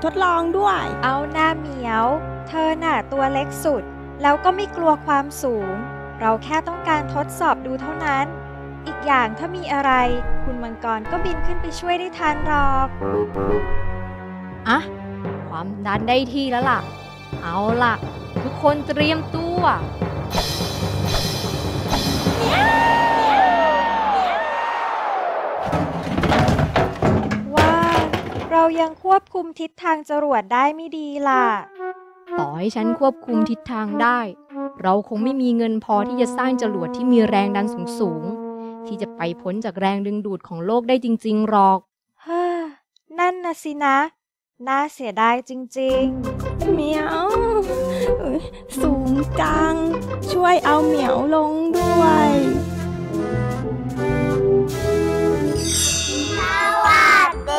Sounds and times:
Music: 0.0s - 24.6s, 31.1s - 40.3s, 45.9s - 57.5s
Child speech, kid speaking: 8.9s - 12.9s, 17.4s - 19.8s, 27.6s - 31.6s, 32.4s - 38.3s, 48.8s - 52.6s, 56.3s - 57.5s.

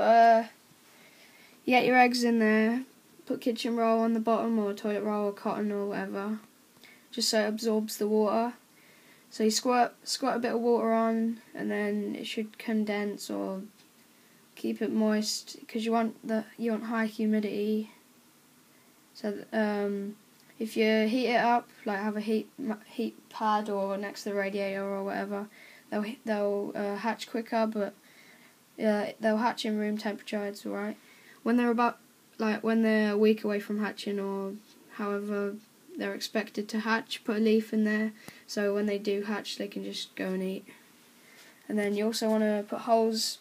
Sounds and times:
Speech: 0.0s - 0.6s, 1.6s - 6.5s, 7.1s - 8.6s, 9.3s - 13.8s, 14.6s - 18.0s, 19.2s - 28.0s, 28.8s - 40.8s, 41.6s - 43.4s.

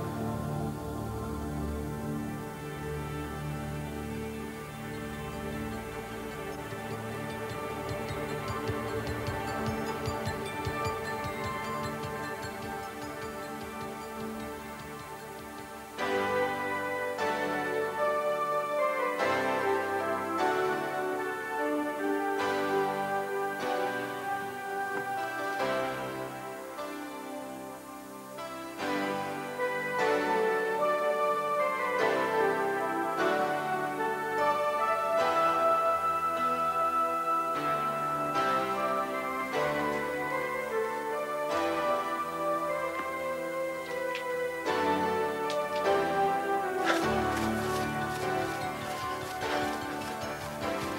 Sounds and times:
Music: 0.0s - 50.9s.

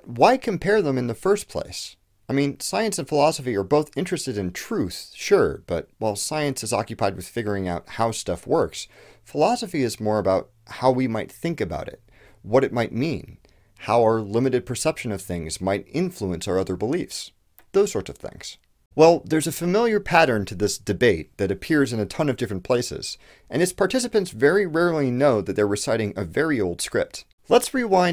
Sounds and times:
Speech: 0.0s - 28.1s.

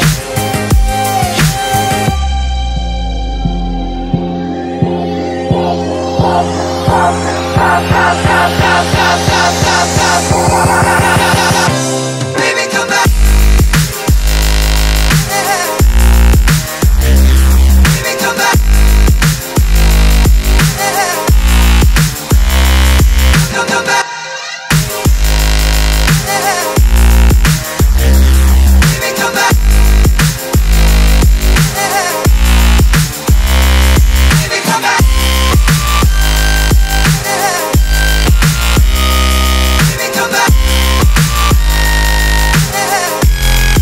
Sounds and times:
Drum and bass: 0.0s - 43.8s.

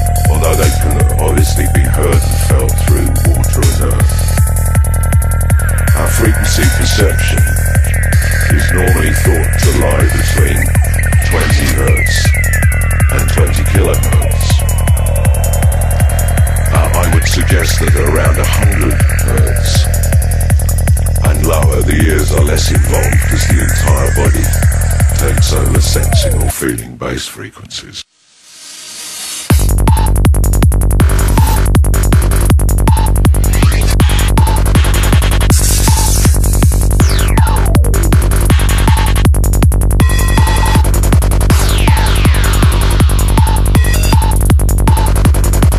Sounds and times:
Music: 0.0s - 26.8s, 28.2s - 45.7s
Speech: 0.3s - 4.2s, 5.9s - 7.6s, 8.5s - 12.4s, 13.0s - 14.6s, 16.7s - 19.9s, 21.2s - 24.6s, 25.2s - 28.1s.

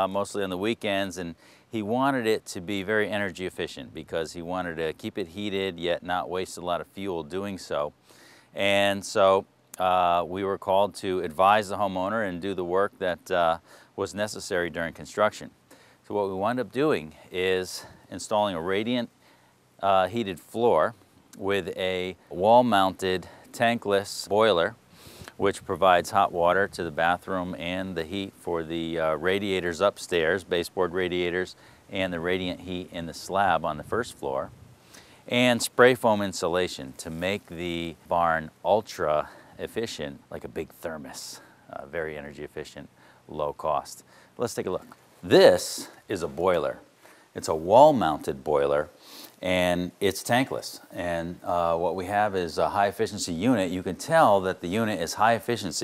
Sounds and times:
Speech: 0.0s - 8.0s, 8.6s - 19.1s, 19.8s - 24.8s, 25.4s - 34.5s, 35.3s - 55.8s.

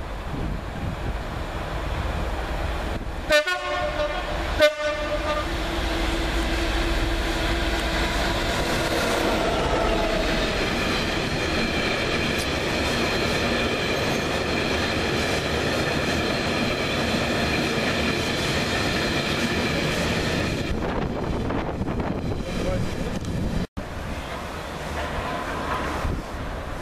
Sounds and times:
Railroad car, train wagon: 0.0s - 26.8s
Train horn: 3.3s - 5.6s.

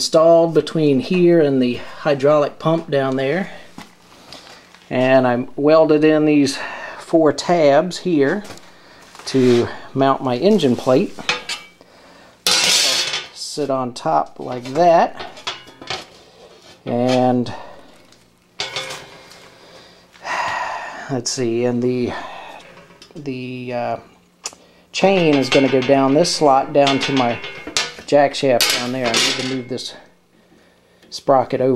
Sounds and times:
Speech: 0.0s - 3.6s, 4.9s - 8.6s, 9.3s - 11.2s, 12.8s - 15.2s, 16.9s - 17.7s, 21.1s - 22.4s, 23.2s - 24.1s, 25.0s - 27.4s, 28.1s - 30.1s, 31.1s - 31.7s.

